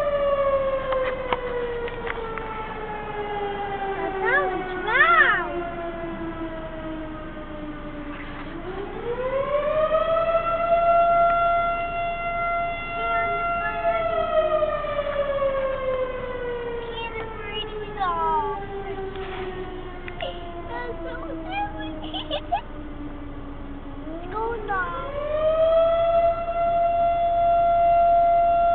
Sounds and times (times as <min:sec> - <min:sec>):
Civil defense siren: 0:00.0 - 0:28.7.